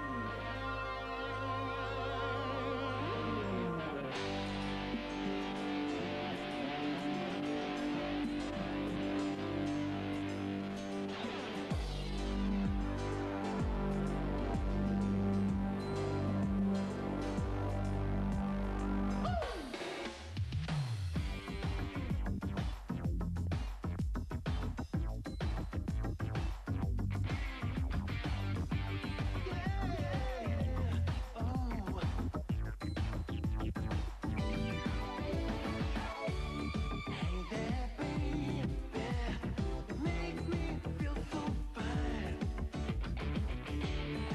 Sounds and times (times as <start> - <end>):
Dance music: 0.0 - 44.3
Rhythm and blues: 0.0 - 44.3.